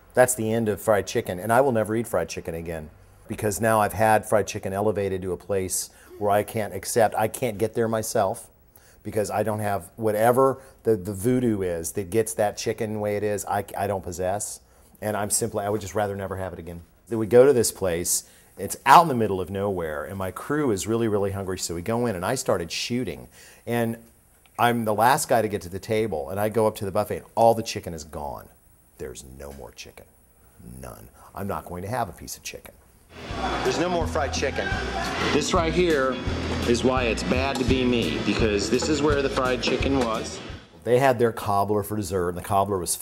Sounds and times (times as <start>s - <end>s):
Speech: 0.2s - 32.8s, 33.6s - 43.0s.